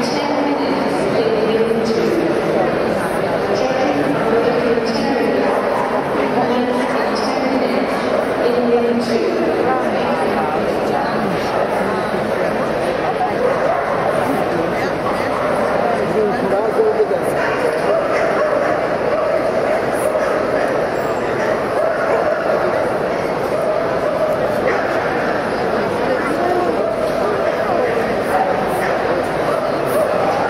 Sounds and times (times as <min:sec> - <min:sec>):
Speech: 0:00.0 - 0:30.4
Bow-wow: 0:13.4 - 0:14.3, 0:17.3 - 0:25.5.